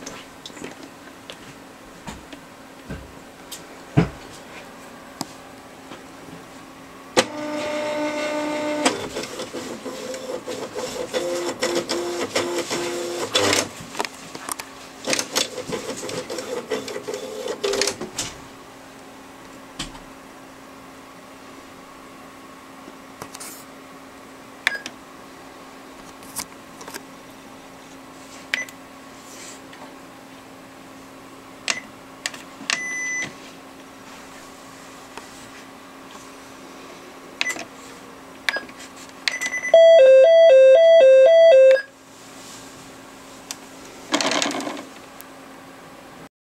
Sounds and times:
Cash register: 7.2s - 13.7s, 15.1s - 18.0s, 39.4s - 41.9s.

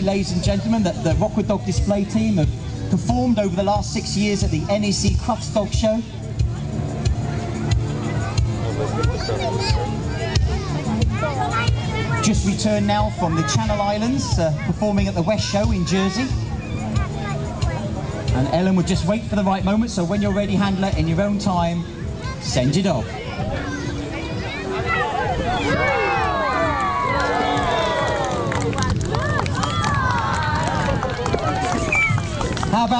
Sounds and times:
Music: 0.0s - 32.9s.

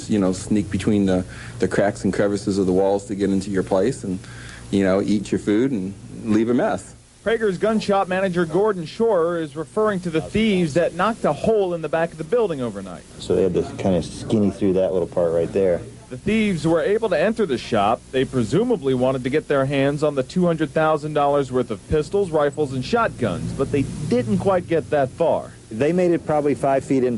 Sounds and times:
Speech: 0.0s - 27.1s.

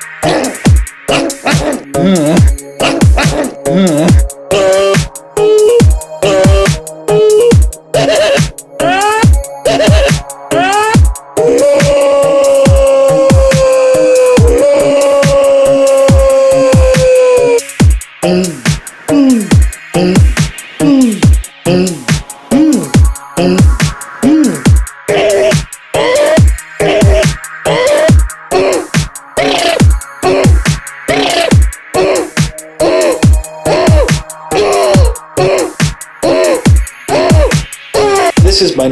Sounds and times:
Music: 0.0s - 38.9s.

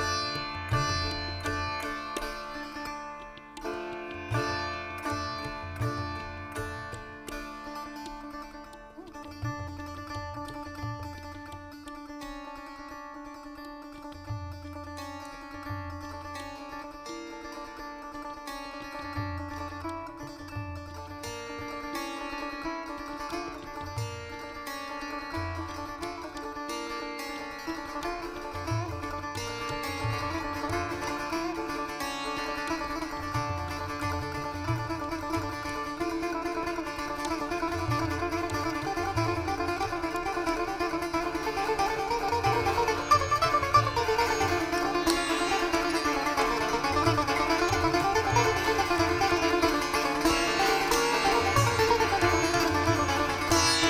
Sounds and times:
Sitar: 0.0s - 53.8s.

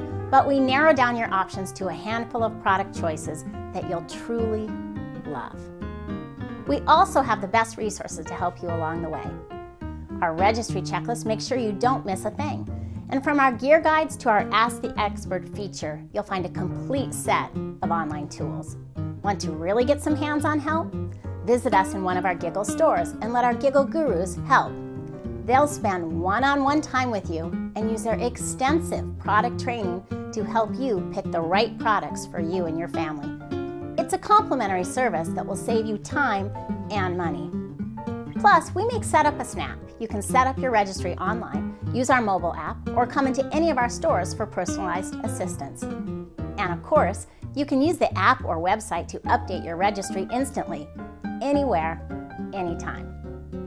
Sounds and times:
Music: 0.0s - 53.6s
Speech: 0.4s - 5.6s, 6.7s - 9.4s, 10.2s - 20.9s, 21.5s - 24.7s, 25.5s - 33.3s, 34.0s - 37.5s, 38.4s - 45.8s, 46.6s - 52.0s, 52.6s - 53.1s.

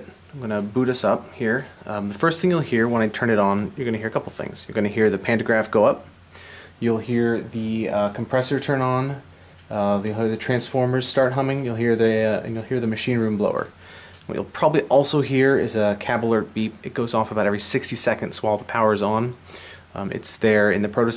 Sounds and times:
Speech: 0.0s - 6.1s, 6.8s - 21.1s.

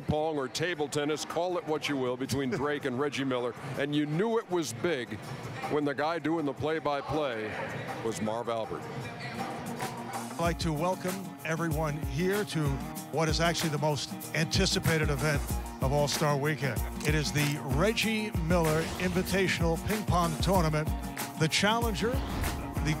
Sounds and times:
Music: 4.4s - 23.0s.

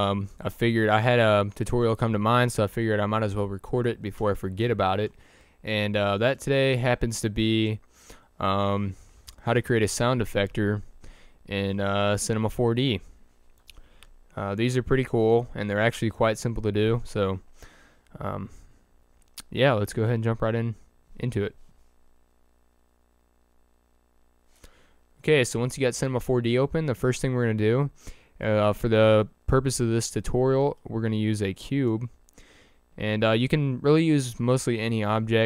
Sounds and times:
Speech: 0.0s - 7.8s, 8.4s - 10.9s, 11.5s - 13.1s, 14.4s - 17.4s, 18.2s - 18.6s, 19.4s - 21.6s, 25.2s - 32.2s, 33.0s - 35.4s.

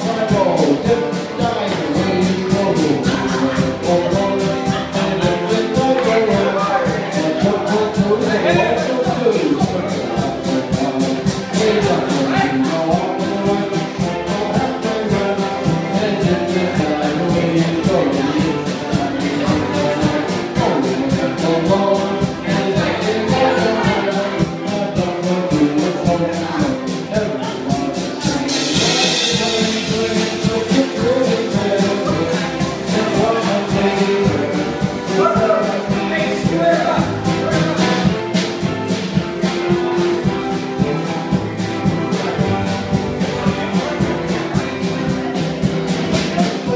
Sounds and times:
Male singing: 0.0s - 38.2s, 46.1s - 46.7s
Music: 0.0s - 46.7s
Speech: 0.0s - 46.7s.

